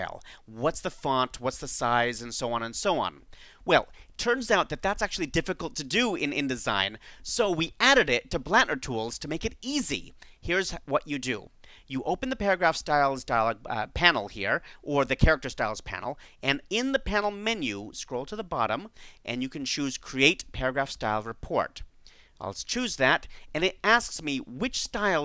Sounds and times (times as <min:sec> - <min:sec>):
Speech: 0:00.0 - 0:25.2.